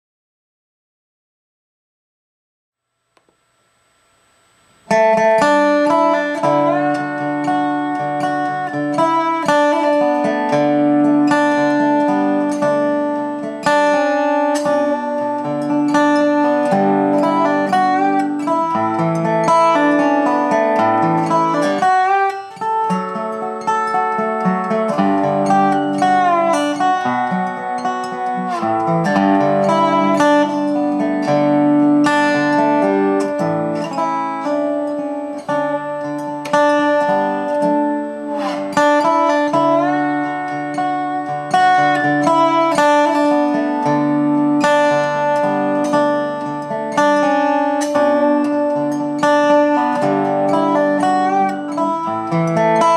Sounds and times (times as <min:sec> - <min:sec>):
Music: 0:04.9 - 0:52.9.